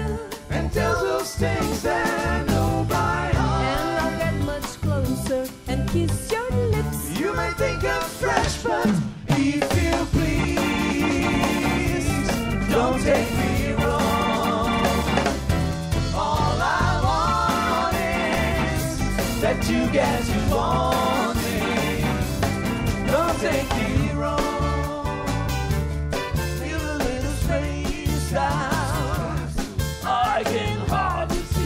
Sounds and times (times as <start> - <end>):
Ska: 0.0 - 31.6.